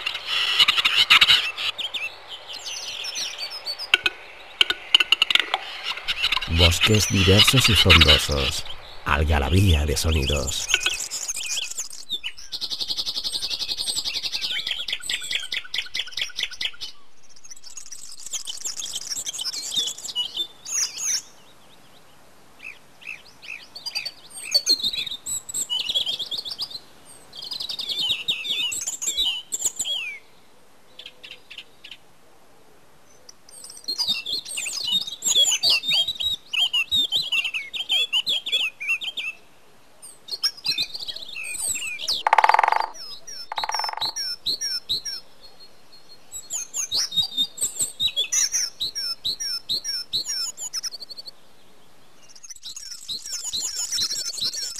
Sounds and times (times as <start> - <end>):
Animal: 42.1 - 44.4.